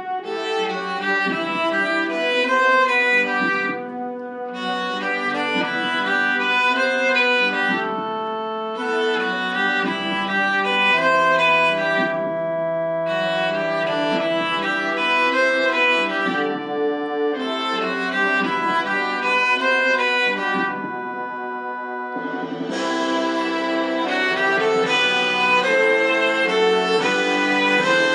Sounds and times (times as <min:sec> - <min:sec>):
Violin, fiddle: 0:00.0 - 0:28.1.